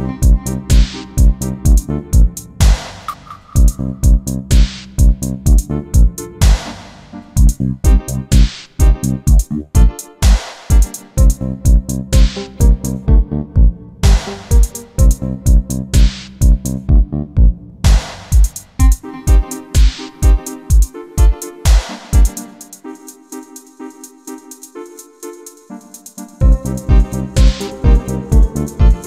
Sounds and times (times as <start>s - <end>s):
Synthesizer: 0.0s - 29.0s.